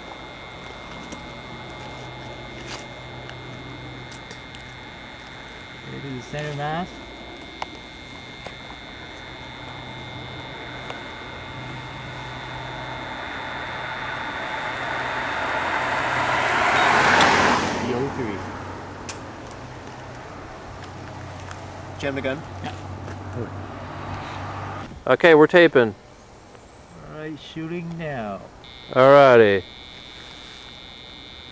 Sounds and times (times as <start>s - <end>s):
Speech: 5.9s - 6.9s, 22.0s - 22.4s, 25.1s - 26.0s, 27.0s - 29.6s.